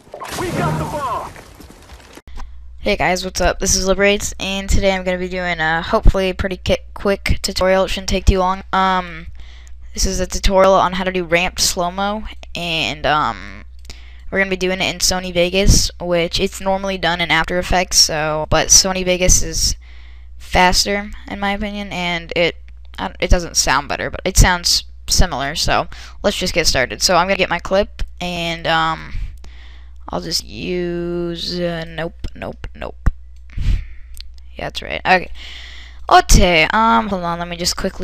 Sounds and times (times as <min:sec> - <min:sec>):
Speech: 0:00.2 - 0:01.3, 0:02.8 - 0:09.3, 0:10.0 - 0:13.6, 0:14.3 - 0:19.8, 0:20.4 - 0:29.3, 0:30.1 - 0:33.1, 0:34.5 - 0:35.4, 0:36.1 - 0:38.0.